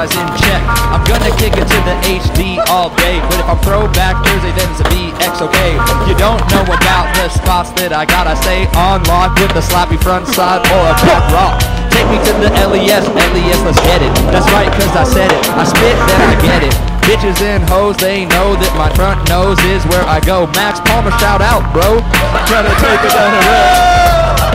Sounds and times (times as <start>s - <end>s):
Music: 0.0s - 24.5s.